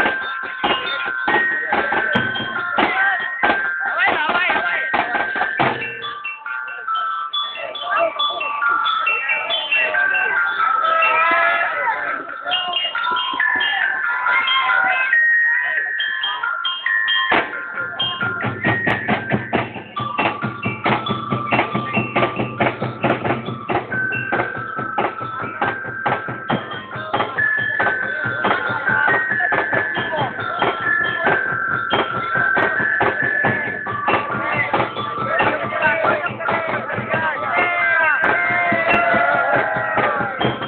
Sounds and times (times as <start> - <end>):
Speech: 0.0 - 5.3, 6.6 - 16.7, 17.3 - 18.8, 24.9 - 40.6
Percussion: 0.0 - 40.6.